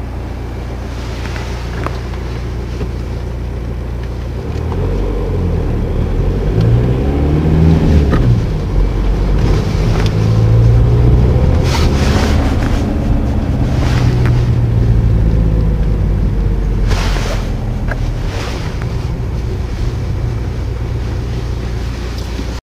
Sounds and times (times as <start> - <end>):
Heavy engine (low frequency): 0.0 - 22.6.